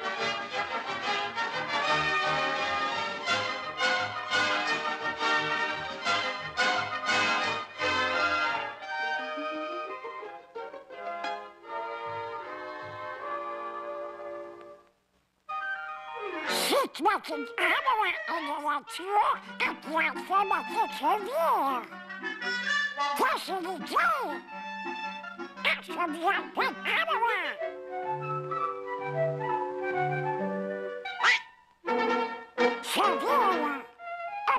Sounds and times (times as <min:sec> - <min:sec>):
Music: 0:00.0 - 0:34.5
Speech: 0:16.5 - 0:21.9, 0:23.2 - 0:24.4, 0:25.6 - 0:27.6, 0:32.8 - 0:33.9.